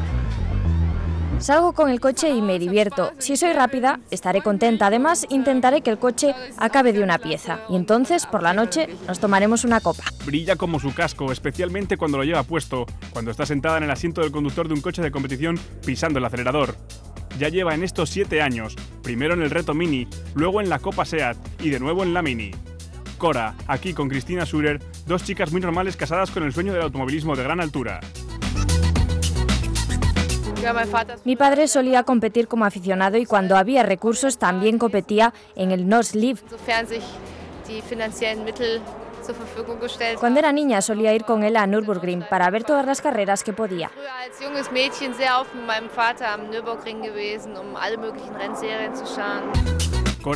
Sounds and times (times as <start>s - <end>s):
Music: 0.0s - 50.3s
Speech: 1.5s - 16.8s, 17.4s - 22.6s, 23.2s - 28.0s, 30.5s - 49.5s.